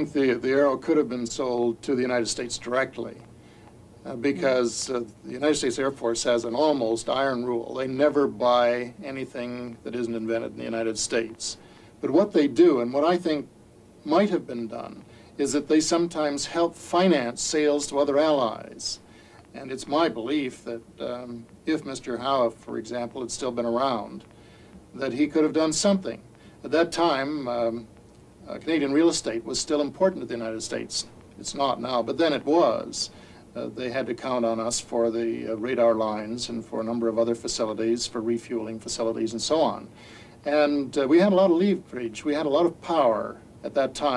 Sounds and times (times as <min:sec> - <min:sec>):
Speech: 0:00.0 - 0:03.3, 0:04.0 - 0:24.3, 0:24.9 - 0:44.1.